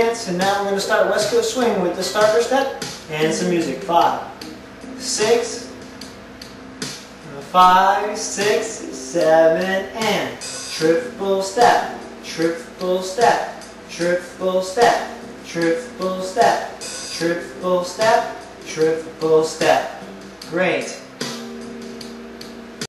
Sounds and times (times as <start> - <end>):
Speech: 0.0 - 4.3, 5.0 - 5.7, 7.3 - 21.0
Music: 0.0 - 22.8.